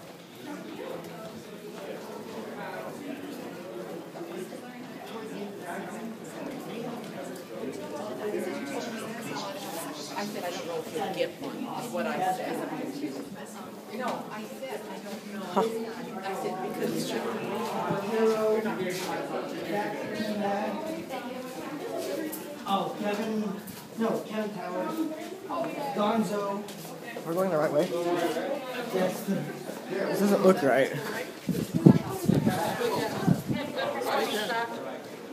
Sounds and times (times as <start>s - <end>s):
Speech: 0.4s - 35.3s.